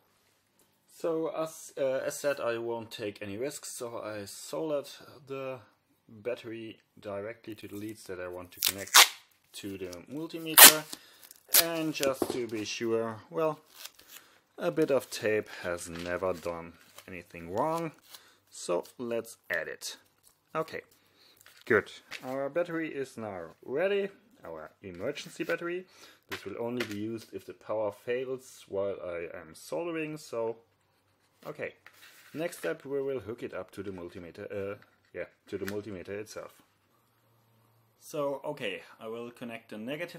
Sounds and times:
Inside, small room: 0.0 - 40.1
Speech: 0.9 - 10.9, 11.5 - 13.7, 14.6 - 20.9, 21.6 - 30.7, 31.4 - 31.8, 32.4 - 36.6, 38.0 - 40.1.

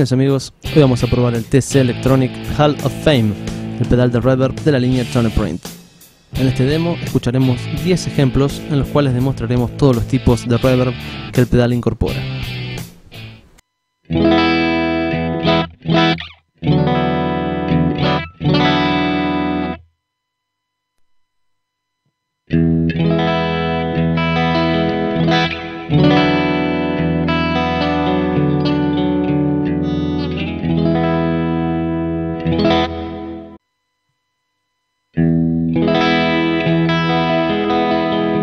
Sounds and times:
Music: 0.0 - 13.5, 14.1 - 19.8, 22.5 - 33.6, 35.2 - 38.4.

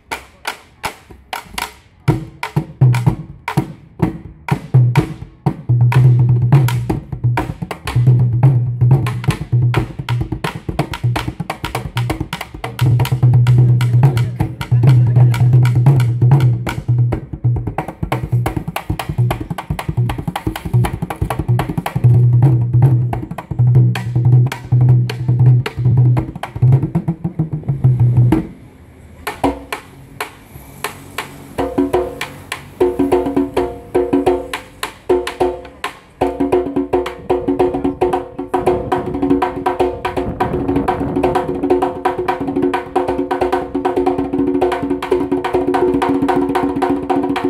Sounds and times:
Wood block: 0.0 - 3.8, 5.8 - 28.5, 29.2 - 40.6
Drum: 0.8 - 28.6, 31.2 - 47.4.

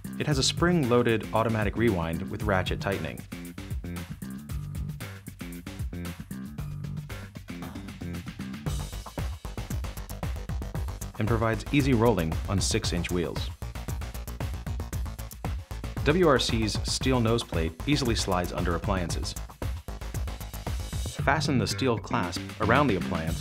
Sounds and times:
Music: 0.0 - 23.4
Speech: 0.2 - 3.2, 11.2 - 13.5, 16.0 - 19.4, 21.2 - 23.4.

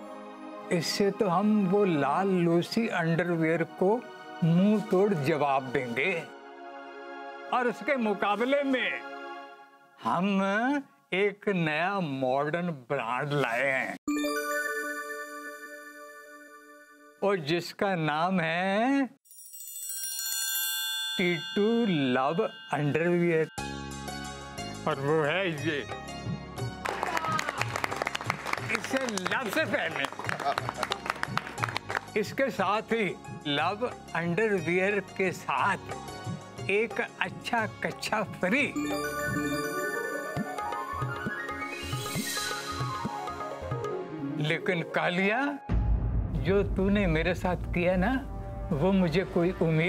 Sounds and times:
Music: 0.0 - 11.3, 14.1 - 17.6, 19.3 - 49.8
Speech: 7.6 - 9.0, 10.0 - 14.0, 17.2 - 19.2, 21.2 - 23.5, 44.4 - 45.6, 46.4 - 49.8.

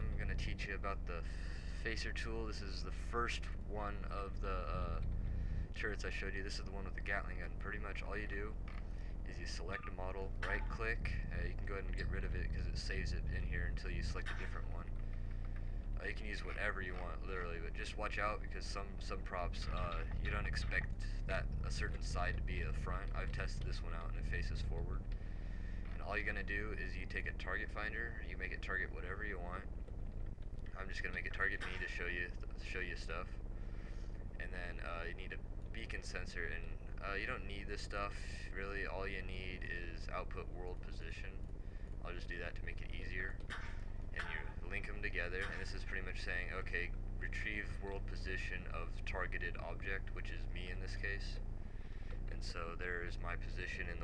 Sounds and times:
Speech: 0.0 - 8.6, 9.2 - 15.0, 16.0 - 25.1, 25.9 - 29.7, 30.8 - 33.4, 34.4 - 41.4, 42.0 - 43.4, 44.2 - 51.4, 52.3 - 54.0.

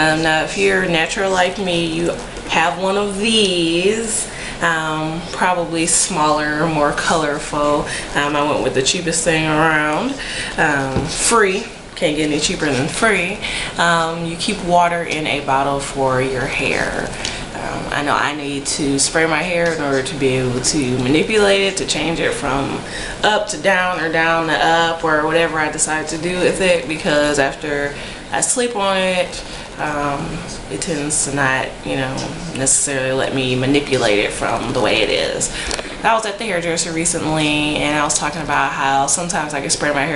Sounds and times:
Speech: 0.0 - 40.1.

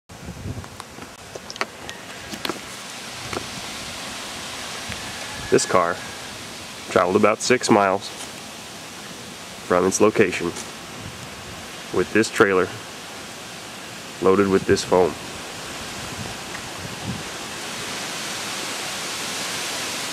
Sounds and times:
Waterfall: 0.1 - 20.1.

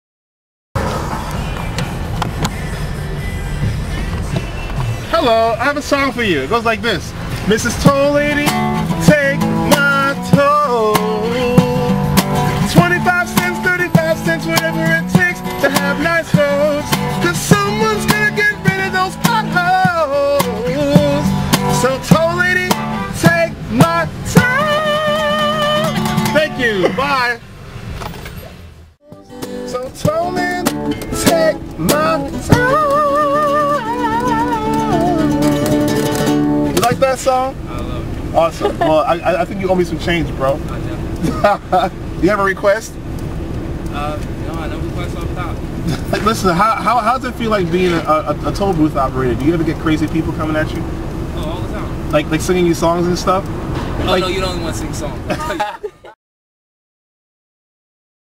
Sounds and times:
Acoustic guitar: 0.8 - 28.4, 29.0 - 56.2
Speech: 5.1 - 7.8, 26.4 - 27.4, 36.8 - 41.1, 42.2 - 43.0, 43.9 - 50.8, 51.4 - 53.4, 54.0 - 56.0
Strum: 7.2 - 27.2, 29.0 - 41.7.

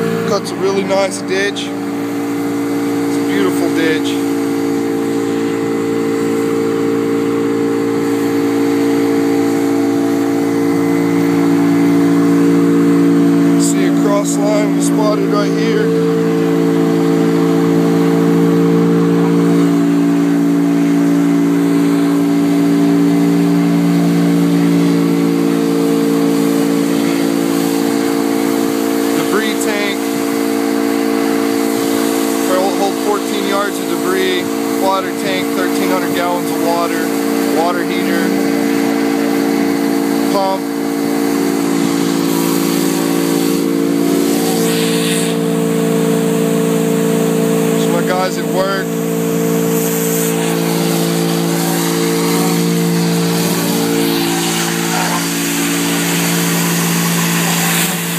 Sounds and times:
Vehicle: 0.0 - 58.1.

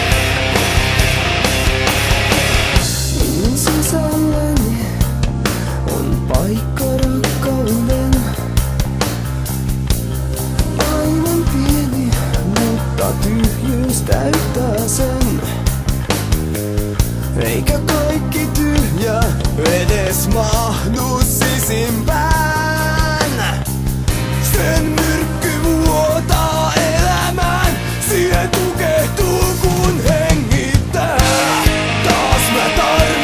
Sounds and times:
Music: 0.0 - 33.2.

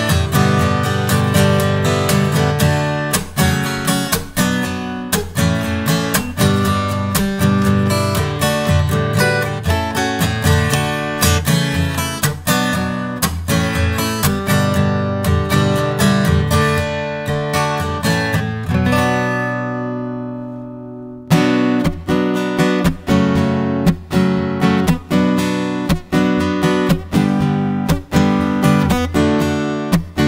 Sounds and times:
Acoustic guitar: 0.0 - 30.2.

